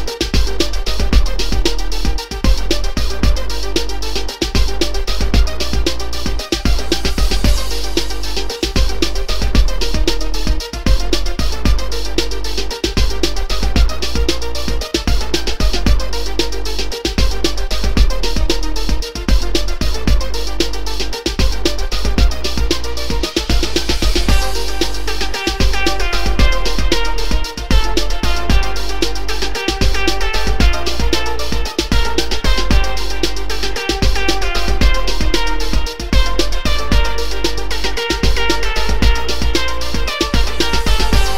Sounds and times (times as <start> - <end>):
Music: 0.0 - 41.3.